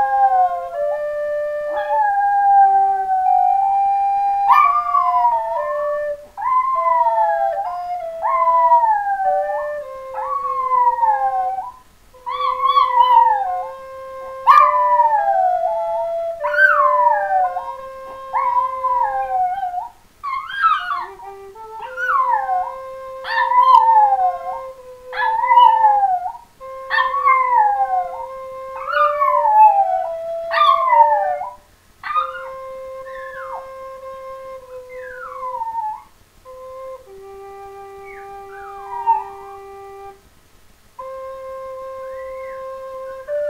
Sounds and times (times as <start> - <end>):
Flute: 0.0 - 40.3, 41.0 - 43.5.